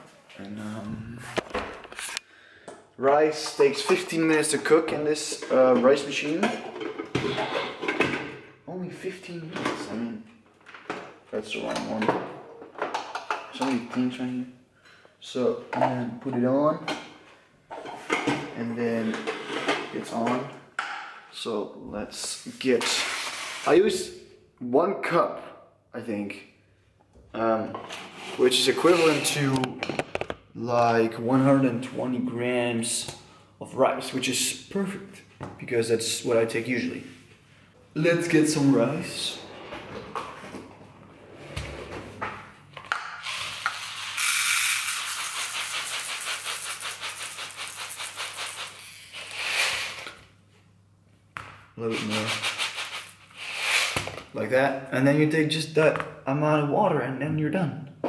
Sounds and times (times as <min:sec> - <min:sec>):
Speech: 0:00.3 - 0:01.4, 0:03.0 - 0:06.6, 0:08.7 - 0:10.3, 0:11.3 - 0:12.3, 0:13.5 - 0:14.6, 0:15.2 - 0:16.9, 0:18.4 - 0:19.3, 0:19.9 - 0:20.6, 0:21.3 - 0:26.6, 0:27.3 - 0:27.8, 0:28.4 - 0:29.8, 0:30.6 - 0:37.2, 0:38.0 - 0:39.4, 0:51.8 - 0:52.4, 0:54.4 - 0:58.0.